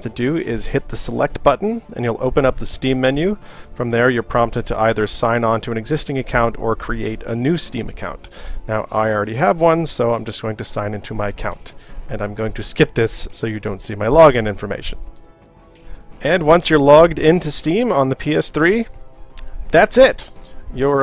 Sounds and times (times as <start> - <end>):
Speech: 0.0 - 15.0, 16.2 - 18.9, 19.7 - 21.0
Music: 0.0 - 21.0.